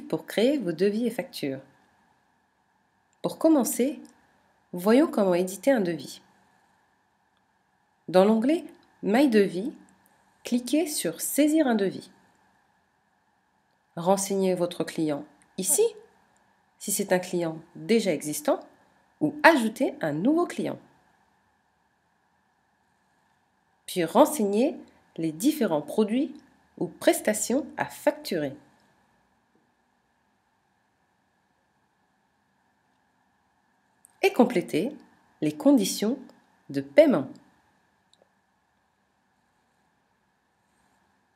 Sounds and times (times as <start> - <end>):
Speech: 0.0 - 1.7, 3.2 - 4.2, 4.8 - 6.3, 8.1 - 9.9, 10.5 - 12.2, 14.0 - 16.1, 16.8 - 20.9, 23.9 - 28.7, 34.2 - 37.5.